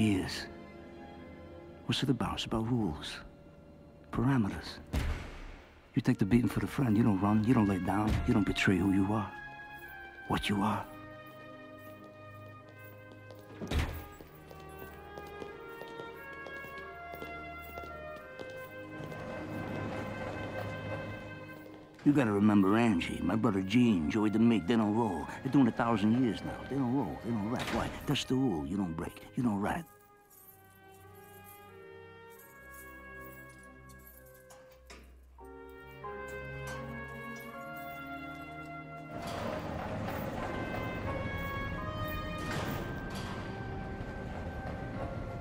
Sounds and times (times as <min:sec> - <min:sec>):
Male speech, man speaking: 0:00.0 - 0:00.5, 0:01.9 - 0:03.3, 0:04.1 - 0:04.8, 0:06.0 - 0:09.3, 0:10.3 - 0:10.9, 0:22.0 - 0:29.9
Narration, monologue: 0:00.0 - 0:31.5
Music: 0:00.0 - 0:45.4.